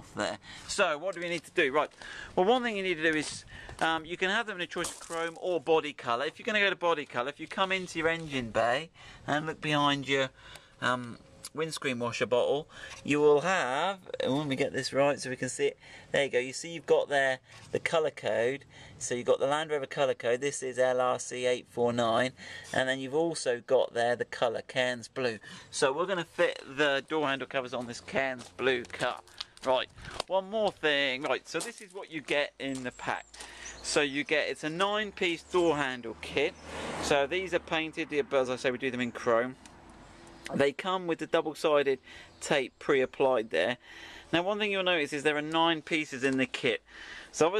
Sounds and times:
Speech: 0.0 - 39.6, 40.5 - 47.5.

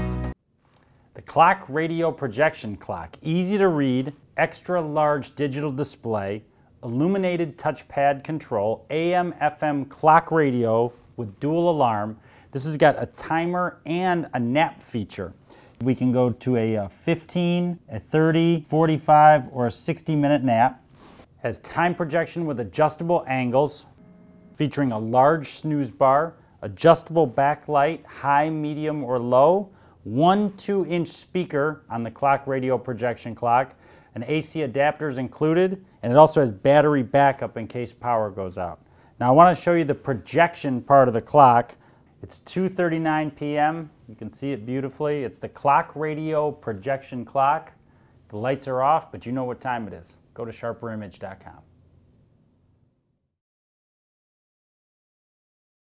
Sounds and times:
Speech: 1.2 - 20.8, 21.4 - 24.0, 24.6 - 51.7.

